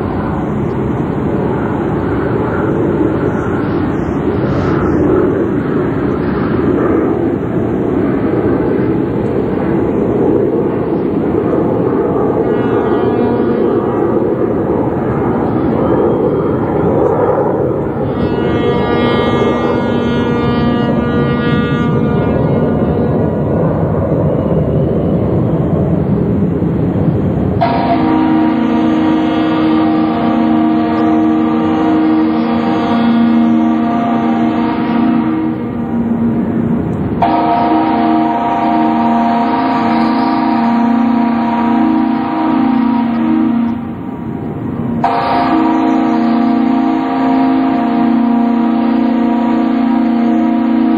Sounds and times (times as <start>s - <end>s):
Ship: 0.0s - 50.9s.